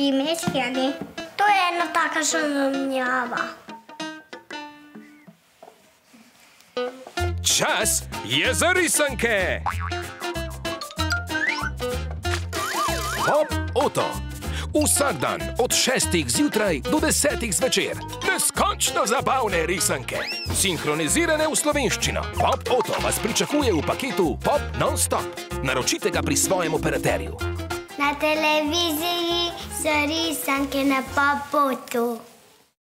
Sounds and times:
Music: 0:00.0 - 0:31.4
Speech: 0:07.5 - 0:09.6, 0:14.8 - 0:27.4.

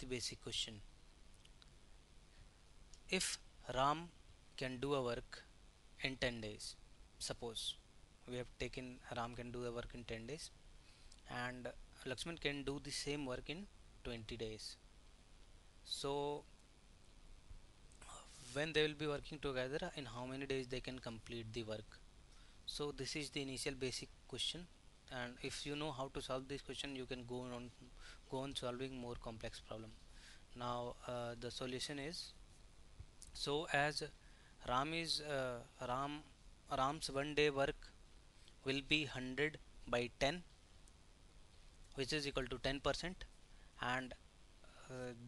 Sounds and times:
Speech: 0:00.0 - 0:00.9, 0:03.1 - 0:10.6, 0:11.3 - 0:14.8, 0:15.8 - 0:16.5, 0:18.0 - 0:22.0, 0:22.7 - 0:30.0, 0:30.6 - 0:32.4, 0:33.3 - 0:38.0, 0:38.6 - 0:40.5, 0:42.0 - 0:44.2, 0:44.8 - 0:45.2.

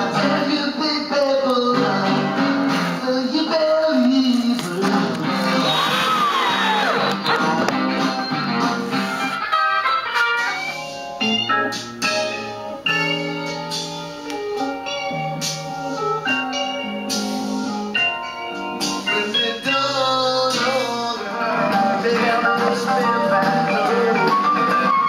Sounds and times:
Music: 0:00.0 - 0:25.0.

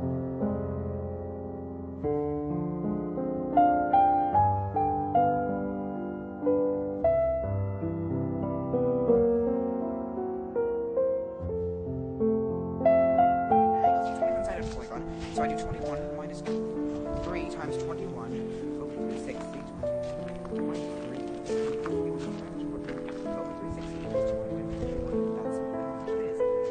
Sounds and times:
Music: 0:00.0 - 0:26.7
Speech: 0:13.6 - 0:26.7.

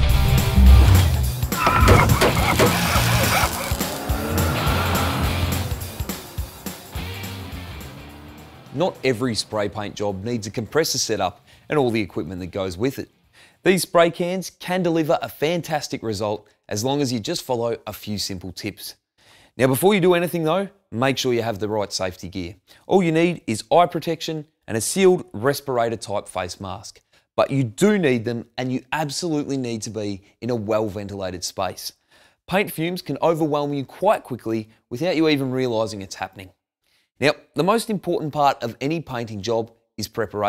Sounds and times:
Speech: 0:08.8 - 0:19.0, 0:19.6 - 0:36.6, 0:37.2 - 0:40.4.

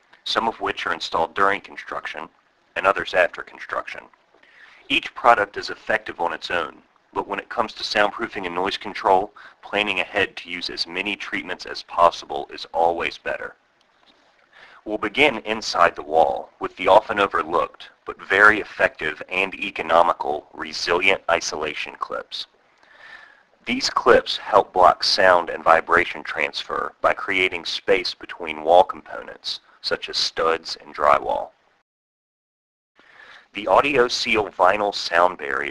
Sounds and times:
Speech: 0:00.2 - 0:04.1, 0:04.8 - 0:13.6, 0:14.7 - 0:22.5, 0:23.7 - 0:31.6, 0:33.4 - 0:35.7.

